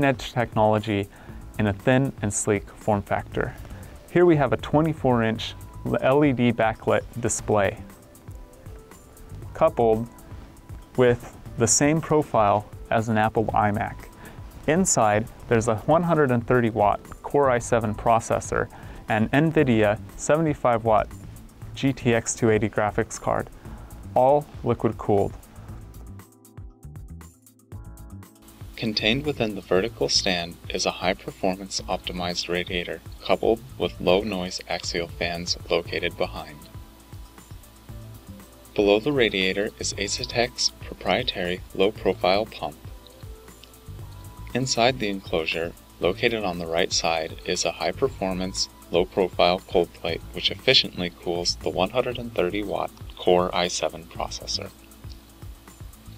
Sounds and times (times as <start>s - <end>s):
Speech: 0.0s - 7.8s, 9.6s - 10.1s, 11.0s - 14.1s, 14.7s - 21.2s, 21.8s - 23.5s, 24.2s - 25.4s, 28.8s - 36.7s, 38.8s - 42.8s, 44.5s - 54.8s
Music: 0.0s - 56.1s.